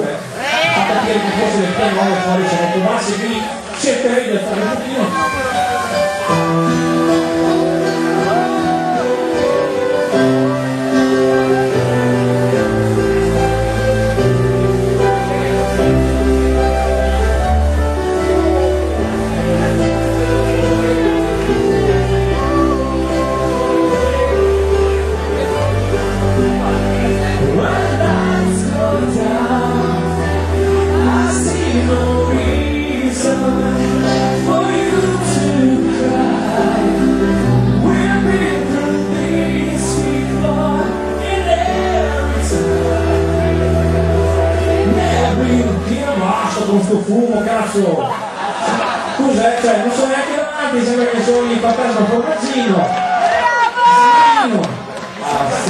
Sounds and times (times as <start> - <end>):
Speech: 0.0 - 6.0, 45.1 - 48.2, 49.1 - 53.0
Music: 0.0 - 55.7.